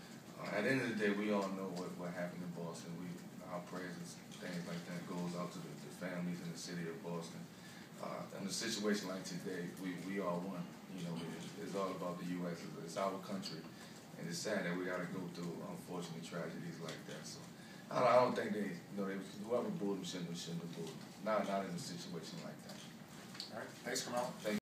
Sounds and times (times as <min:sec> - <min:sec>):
Speech: 0:00.4 - 0:24.6.